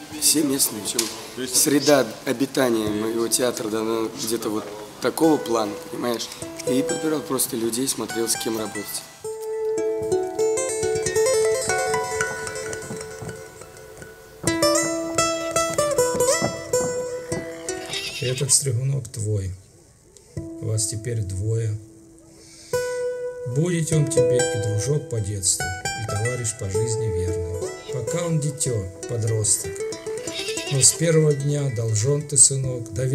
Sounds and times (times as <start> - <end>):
Music: 5.0 - 18.2, 20.4 - 33.1
Animal: 17.5 - 18.6.